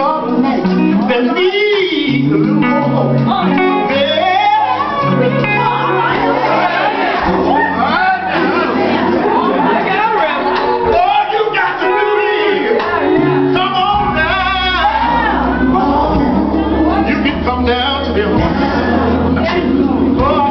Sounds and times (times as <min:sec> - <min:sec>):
Male singing: 0:00.0 - 0:06.2, 0:10.8 - 0:20.5
Speech: 0:00.0 - 0:16.0
Music: 0:00.0 - 0:20.5.